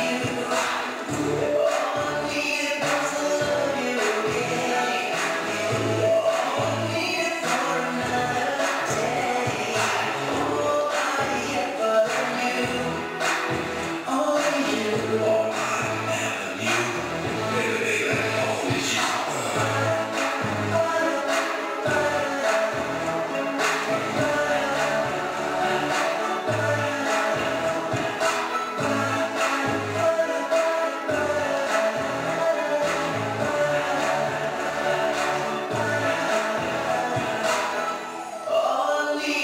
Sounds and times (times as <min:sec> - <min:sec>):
Music: 0:00.0 - 0:39.4.